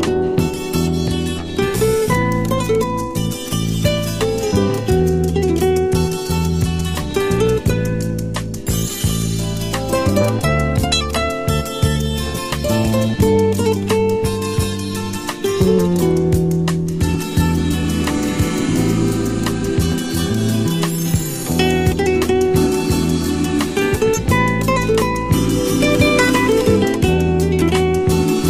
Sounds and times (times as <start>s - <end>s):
Acoustic guitar: 0.0s - 28.4s
Strum: 0.0s - 28.4s
Electric guitar: 12.3s - 28.4s.